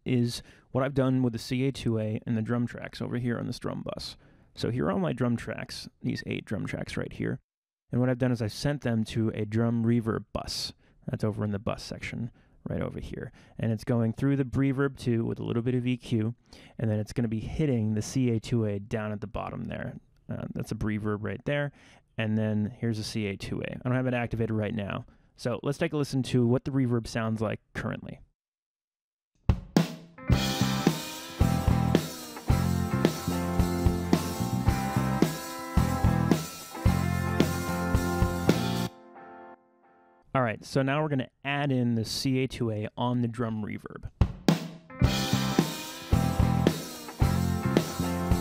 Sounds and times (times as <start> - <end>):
Speech: 0.0 - 28.3, 40.4 - 44.2
Drum: 29.4 - 38.9, 44.2 - 48.4
Drum kit: 29.5 - 38.9, 44.2 - 48.4.